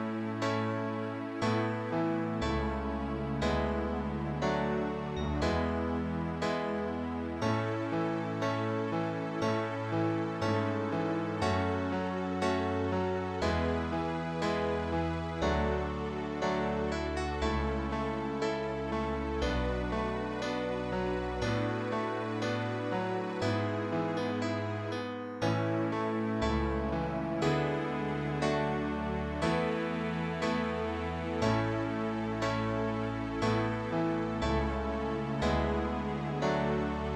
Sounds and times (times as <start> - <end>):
Music: 0.0 - 37.1.